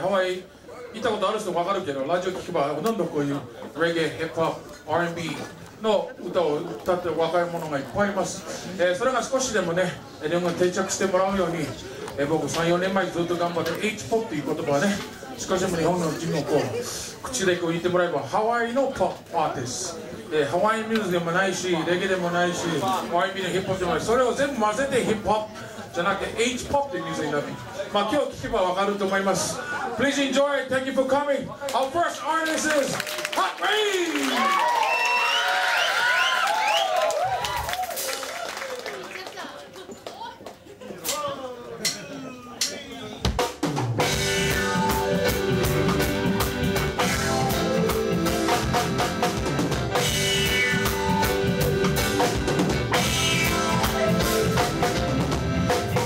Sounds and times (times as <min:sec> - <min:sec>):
Speech: 0:00.0 - 0:34.5.